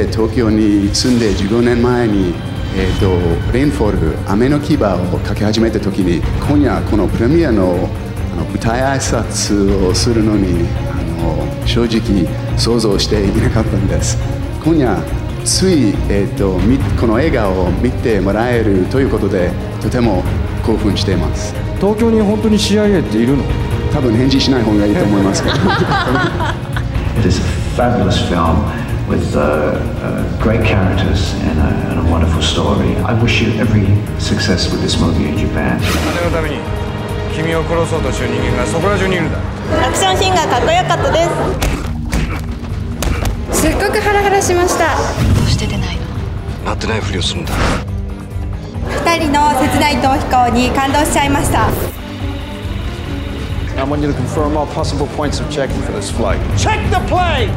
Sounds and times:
Music: 0.0s - 57.5s.

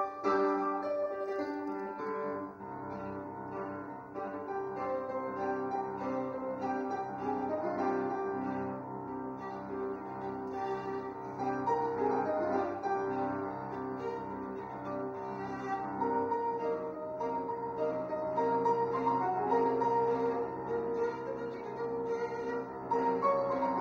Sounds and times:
Violin, fiddle: 0.0s - 23.8s.

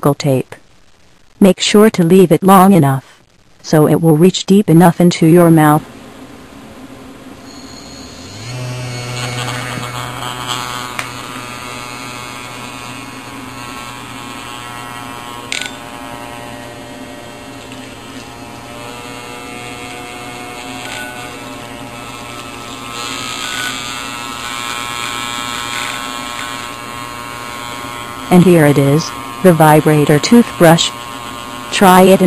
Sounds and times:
Electric toothbrush: 7.4s - 32.2s.

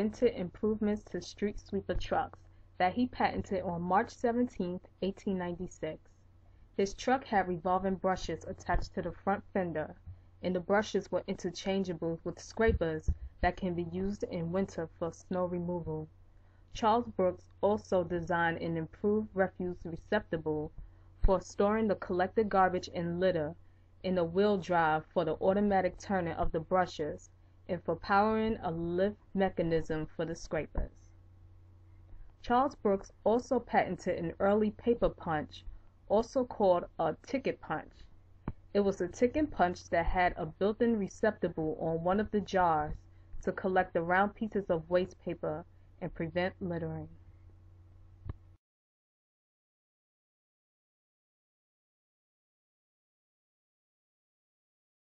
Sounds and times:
Speech: 0.0s - 6.0s, 6.8s - 16.1s, 16.8s - 31.0s, 32.4s - 38.0s, 38.7s - 47.2s.

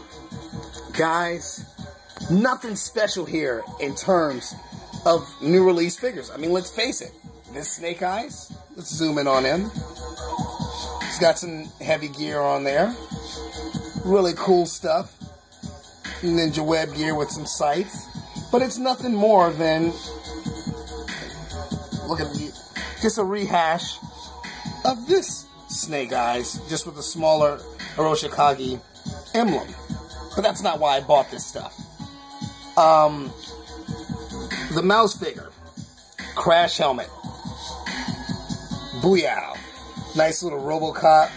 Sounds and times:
Music: 0.0s - 41.3s
Speech: 0.9s - 1.6s, 2.2s - 4.5s, 5.1s - 9.7s, 11.1s - 13.0s, 14.0s - 15.1s, 16.2s - 20.0s, 22.0s - 24.0s, 24.8s - 29.8s, 30.4s - 31.8s, 32.8s - 33.3s, 34.7s - 35.5s, 36.4s - 37.1s, 39.0s - 41.3s.

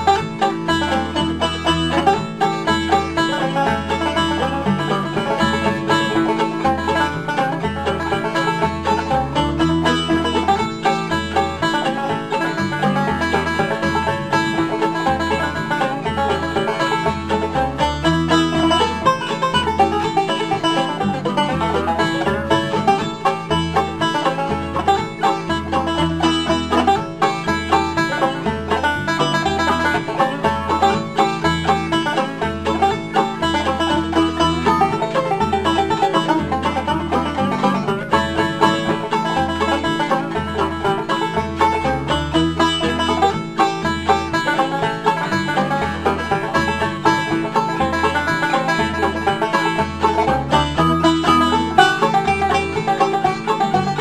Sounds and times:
Banjo: 0.0s - 54.0s
Country: 0.0s - 54.0s.

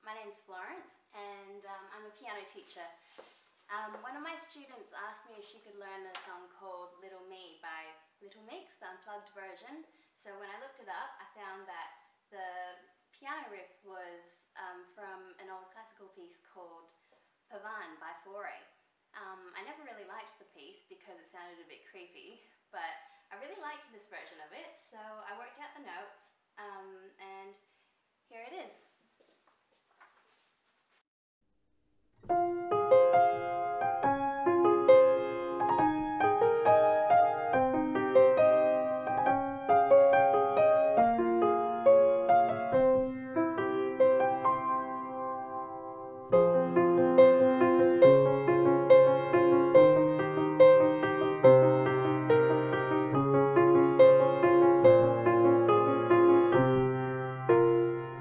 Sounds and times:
Piano: 32.2s - 58.2s.

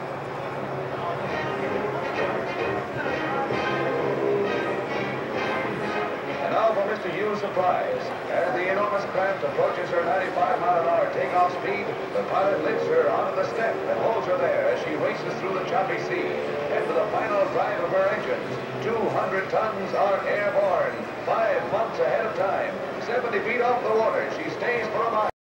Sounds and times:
Speech: 6.4s - 25.4s.

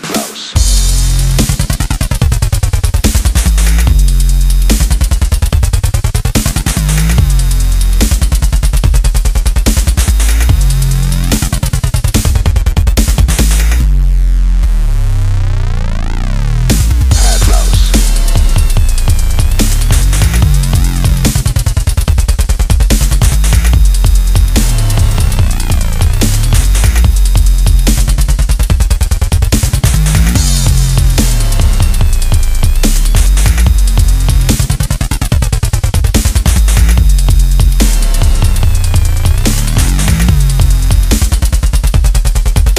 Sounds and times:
Dubstep: 0.0s - 42.7s.

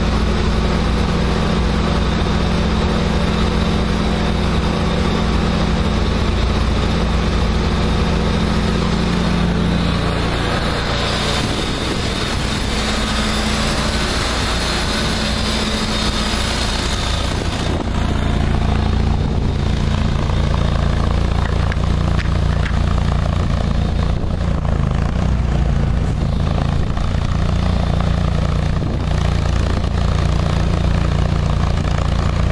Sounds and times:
Vehicle: 0.0s - 32.5s.

